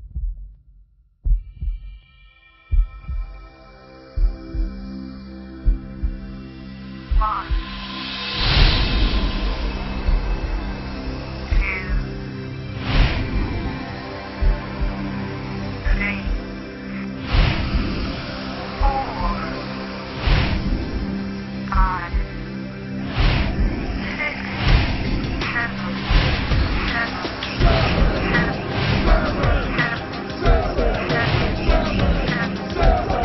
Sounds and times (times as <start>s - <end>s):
Music: 0.0s - 33.2s
Speech: 7.2s - 7.6s, 11.5s - 12.1s, 15.8s - 16.4s, 18.8s - 19.6s, 21.7s - 22.3s, 26.9s - 28.5s.